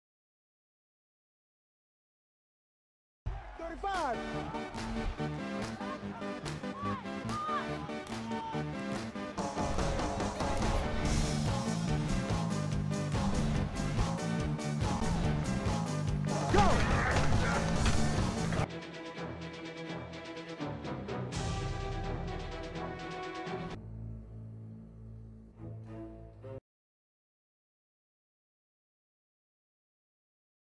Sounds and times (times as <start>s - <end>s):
Music: 3.3s - 26.6s.